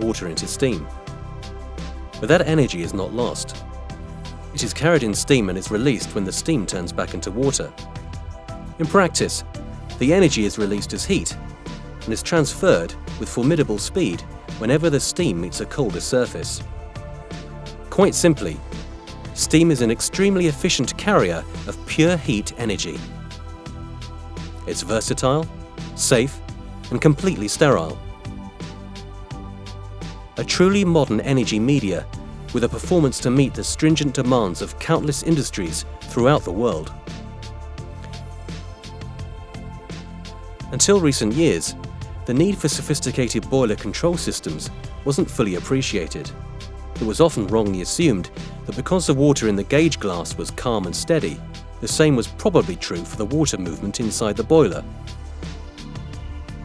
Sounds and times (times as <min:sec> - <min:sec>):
Speech: 0:00.0 - 0:00.9, 0:02.2 - 0:03.6, 0:04.6 - 0:07.7, 0:08.8 - 0:09.4, 0:10.0 - 0:11.4, 0:12.1 - 0:16.6, 0:17.9 - 0:18.6, 0:19.4 - 0:23.0, 0:24.7 - 0:28.0, 0:30.4 - 0:37.0, 0:40.7 - 0:46.3, 0:47.0 - 0:54.9
Music: 0:00.0 - 0:56.6.